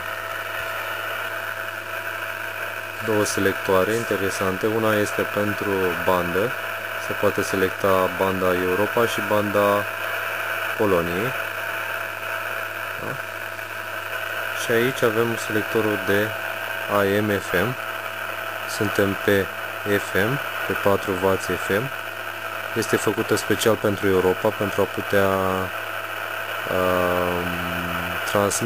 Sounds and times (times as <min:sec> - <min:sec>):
Speech: 0:03.0 - 0:09.9, 0:10.8 - 0:11.4, 0:13.0 - 0:13.2, 0:14.6 - 0:17.8, 0:18.7 - 0:22.0, 0:22.8 - 0:25.7, 0:26.7 - 0:28.6.